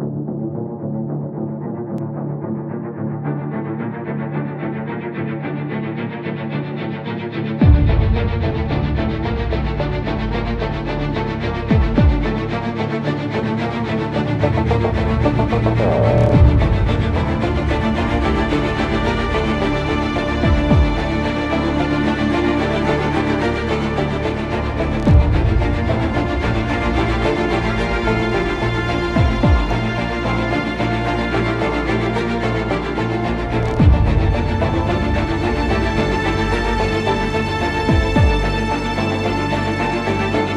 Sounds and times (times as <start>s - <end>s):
Music: 0.0s - 40.5s.